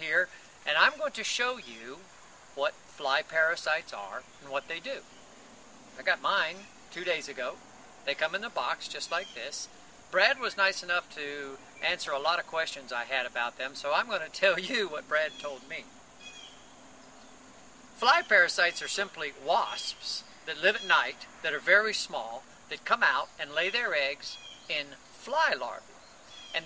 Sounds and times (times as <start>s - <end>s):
Speech: 0.0s - 2.0s, 2.6s - 5.0s, 6.0s - 15.8s, 18.0s - 25.8s
Outside, rural or natural: 0.0s - 26.6s.